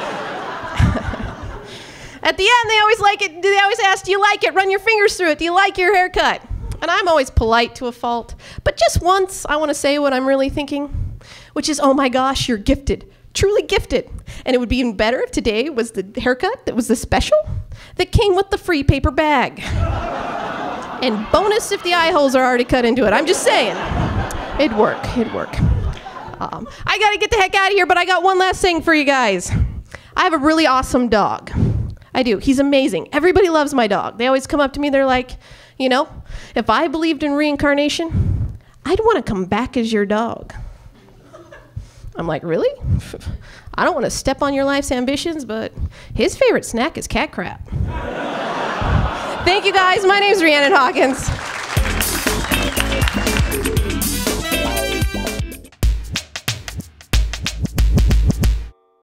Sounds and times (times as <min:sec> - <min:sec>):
Drum machine: 0:51.2 - 0:58.7.